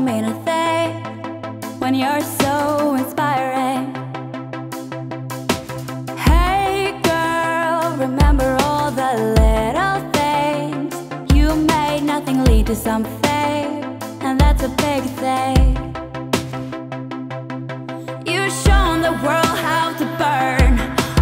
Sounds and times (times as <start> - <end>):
Music: 0.0 - 21.2.